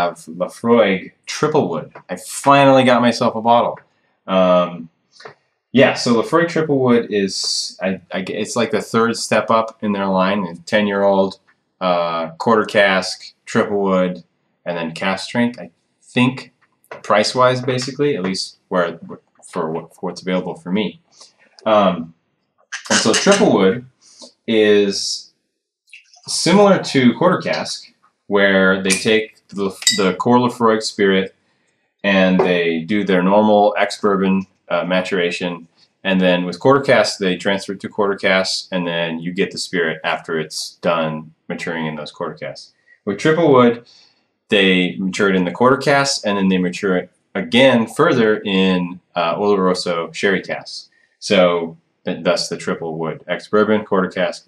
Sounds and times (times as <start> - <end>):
Speech: 0.0 - 22.1, 22.8 - 25.2, 25.9 - 31.3, 32.1 - 54.4.